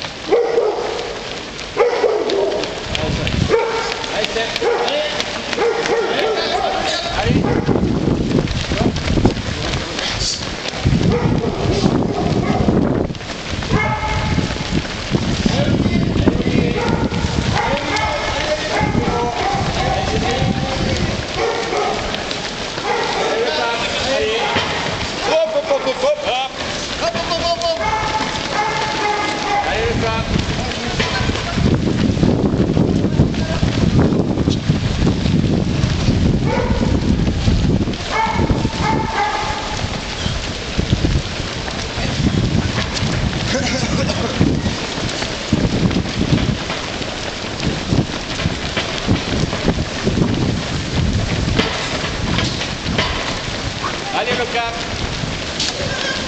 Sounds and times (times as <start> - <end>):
Outside, urban or manmade: 0.0 - 56.2
Run: 0.0 - 56.2
Speech: 6.0 - 7.6, 23.2 - 27.9, 53.8 - 54.9.